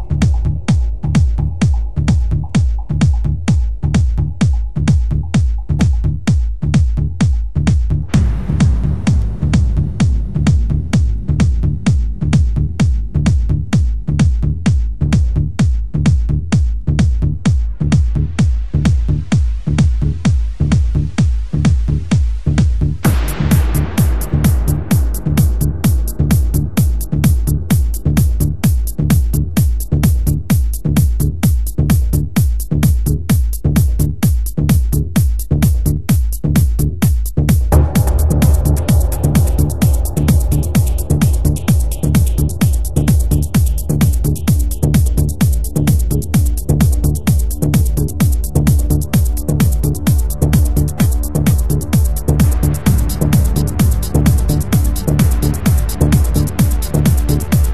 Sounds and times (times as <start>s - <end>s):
Music: 0.0s - 57.7s.